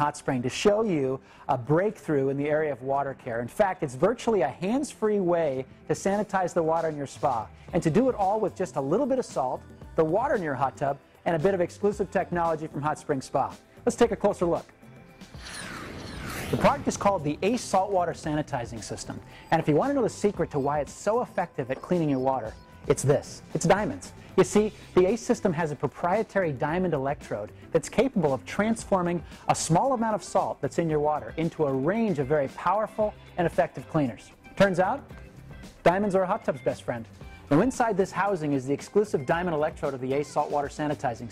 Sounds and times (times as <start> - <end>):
Speech: 0.0 - 14.6, 16.6 - 35.0, 35.8 - 41.3
Music: 0.0 - 41.3.